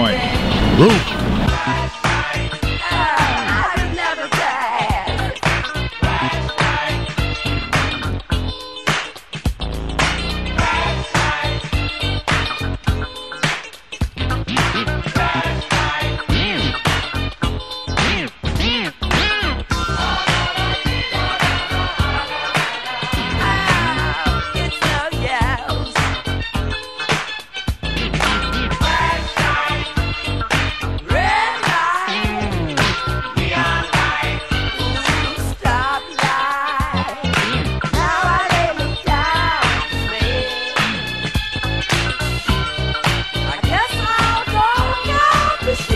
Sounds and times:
Hip hop music: 0.0 - 45.9.

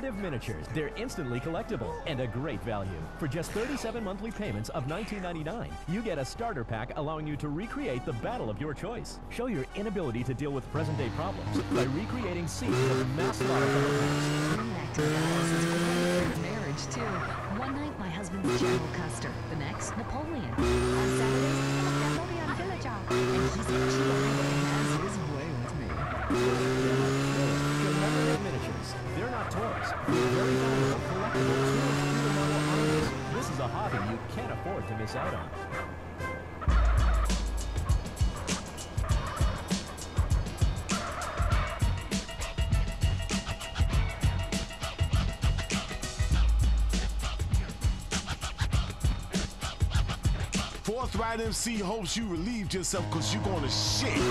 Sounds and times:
Speech: 0.0 - 13.8, 14.5 - 15.6, 16.2 - 26.7, 27.4 - 35.5, 50.8 - 54.3.

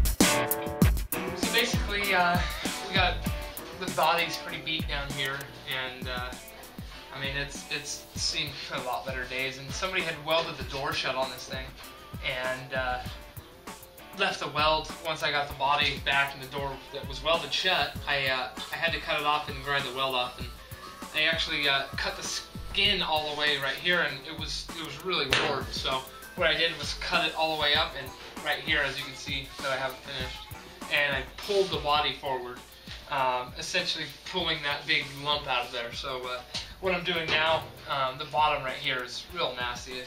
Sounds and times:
Music: 0.0 - 40.0
Speech: 1.5 - 3.2, 3.8 - 6.4, 7.1 - 13.2, 14.2 - 40.0.

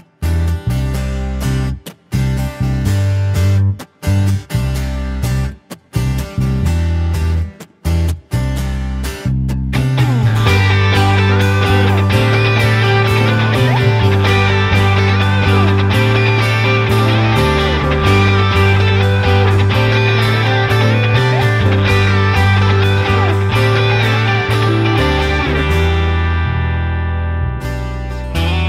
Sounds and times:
Progressive rock: 9.8 - 28.6.

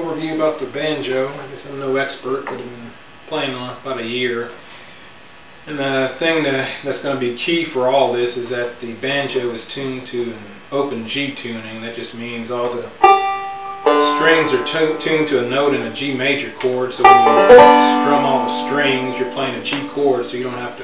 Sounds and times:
Speech: 0.0 - 4.6, 5.7 - 13.0, 14.0 - 20.8
Banjo: 12.6 - 20.8.

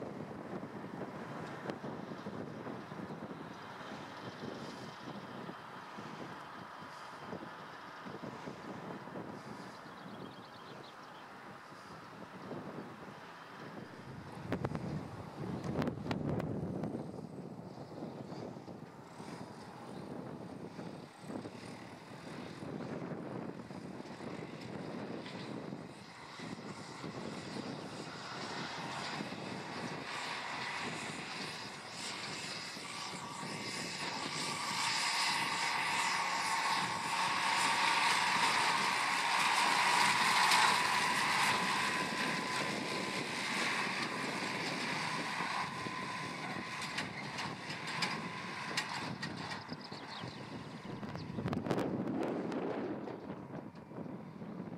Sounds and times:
Outside, rural or natural: 0.0 - 54.7
Vehicle: 0.0 - 54.7.

